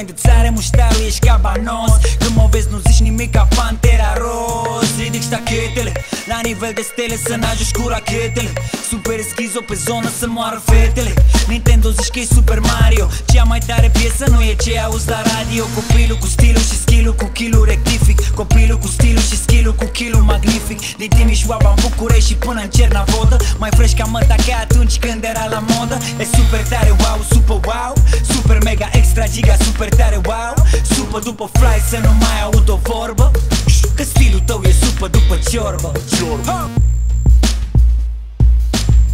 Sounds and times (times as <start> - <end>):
Music: 0.0 - 39.1.